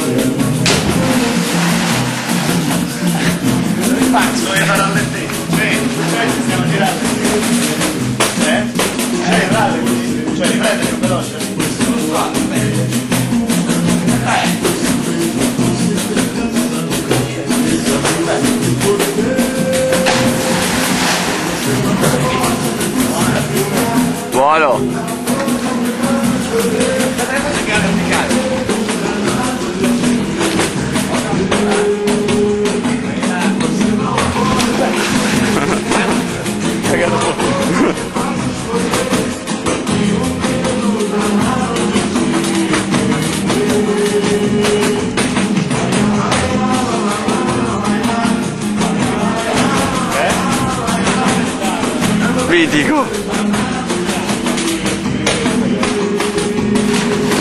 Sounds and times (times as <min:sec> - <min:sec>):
Music: 0:00.0 - 0:57.4
Gurgling: 0:00.6 - 0:04.1, 0:19.8 - 0:23.3, 0:34.2 - 0:38.6.